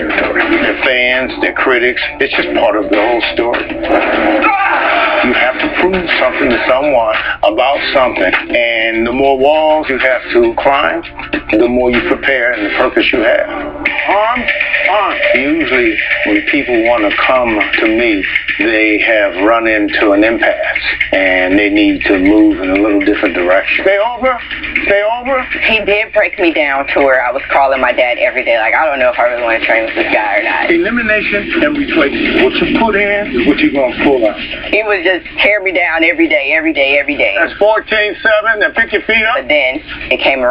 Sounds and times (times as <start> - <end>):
Speech: 0.0 - 3.7, 5.2 - 40.5
Music: 0.0 - 40.5.